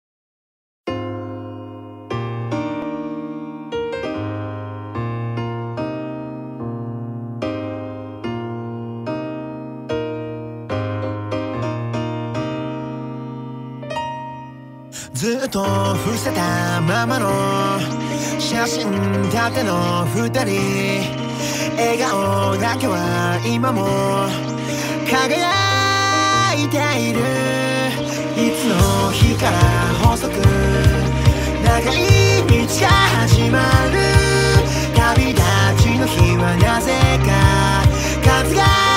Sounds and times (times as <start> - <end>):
Music: 0.9 - 38.9.